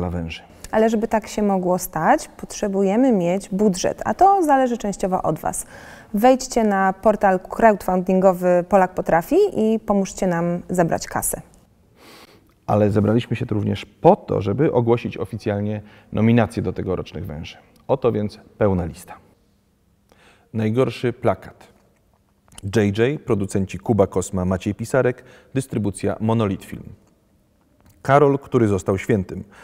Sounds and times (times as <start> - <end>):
Speech: 12.7 - 19.3, 20.6 - 21.7, 22.6 - 27.0.